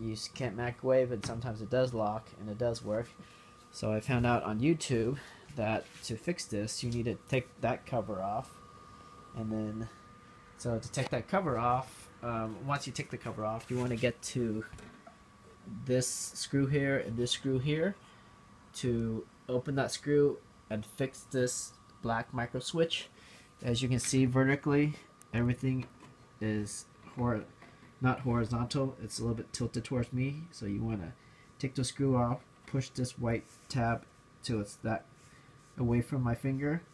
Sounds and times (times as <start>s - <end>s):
Speech: 0.0s - 8.6s, 9.4s - 10.0s, 10.6s - 14.8s, 15.7s - 18.0s, 18.8s - 35.1s, 35.8s - 36.9s.